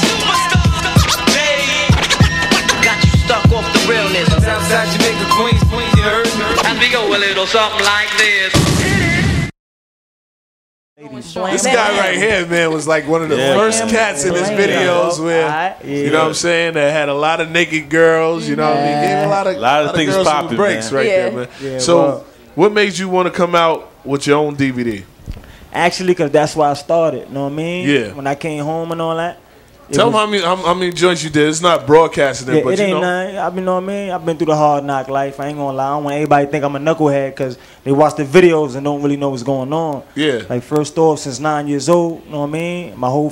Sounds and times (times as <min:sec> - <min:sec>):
Speech: 0:11.0 - 0:25.1, 0:25.8 - 0:43.3.